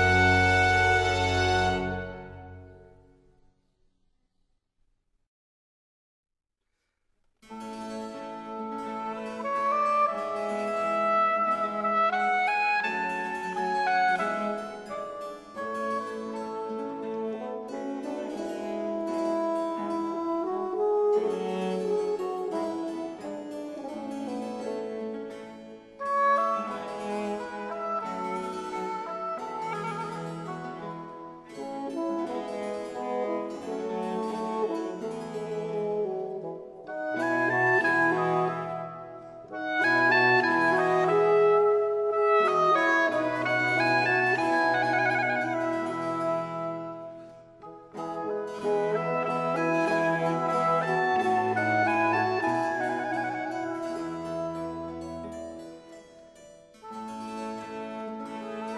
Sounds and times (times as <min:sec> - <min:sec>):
Cello: 0:00.0 - 0:03.3, 0:07.4 - 0:58.7
Harpsichord: 0:07.5 - 0:58.7.